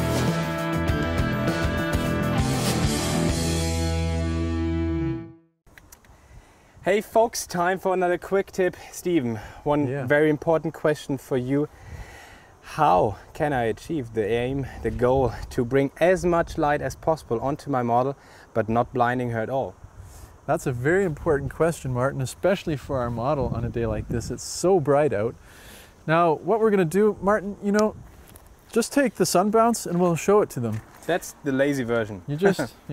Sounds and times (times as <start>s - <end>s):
Speech: 6.8s - 11.7s, 12.7s - 19.8s, 20.5s - 25.4s, 26.1s - 28.0s, 28.7s - 32.9s.